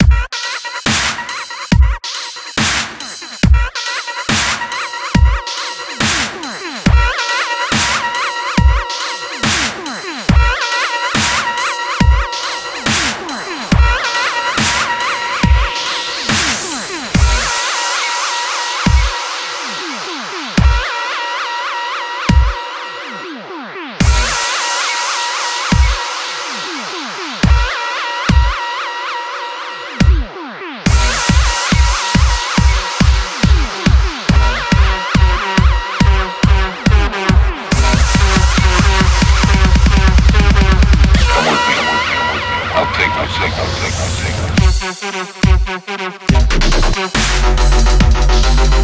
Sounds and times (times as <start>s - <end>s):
Dubstep: 0.0s - 48.8s.